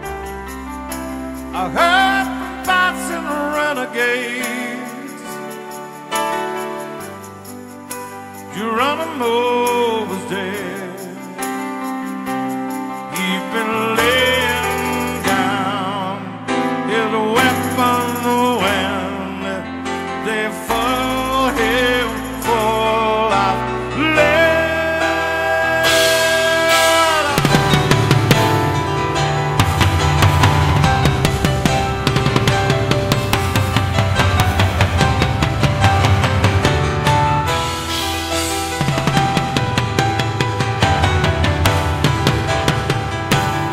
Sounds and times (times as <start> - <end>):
Rock music: 0.0 - 43.7
Singing: 20.2 - 27.6.